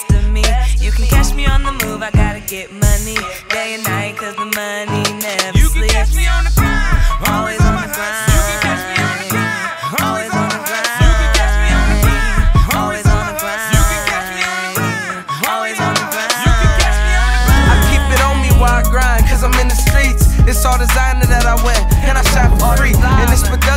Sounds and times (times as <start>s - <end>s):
Rhythm and blues: 0.0s - 23.7s.